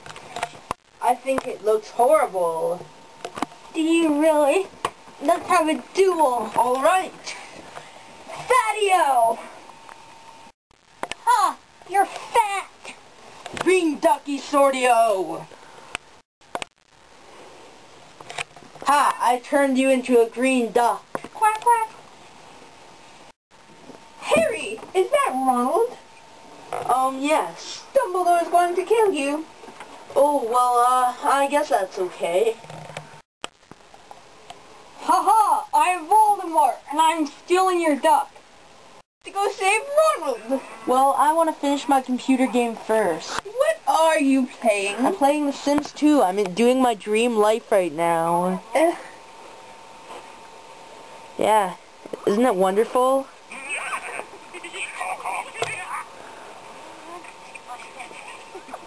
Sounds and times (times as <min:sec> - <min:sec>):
Speech: 0:01.0 - 0:02.9, 0:13.6 - 0:15.5, 0:39.3 - 0:49.1.